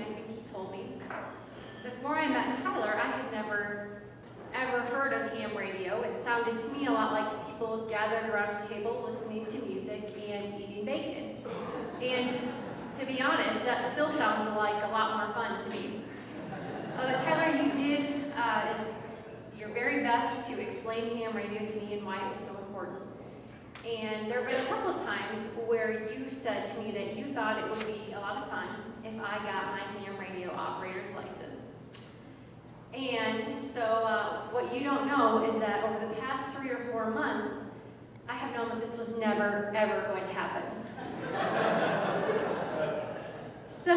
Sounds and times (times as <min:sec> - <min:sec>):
Speech: 0:00.0 - 0:01.1, 0:01.8 - 0:16.1, 0:17.0 - 0:19.0, 0:19.6 - 0:23.1, 0:23.8 - 0:31.7, 0:32.9 - 0:37.6, 0:38.3 - 0:40.8, 0:43.7 - 0:43.9.